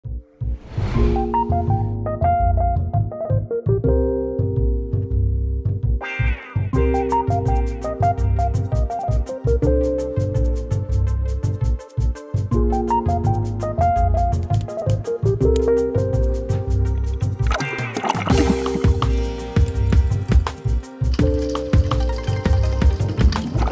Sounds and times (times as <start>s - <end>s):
Synthesizer: 0.0s - 23.7s.